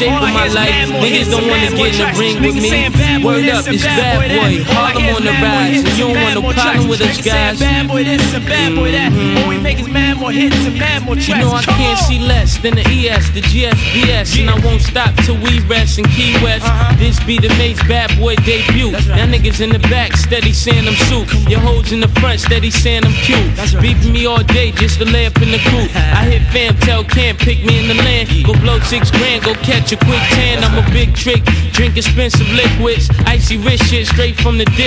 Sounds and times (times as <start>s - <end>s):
Music: 0.0s - 34.8s.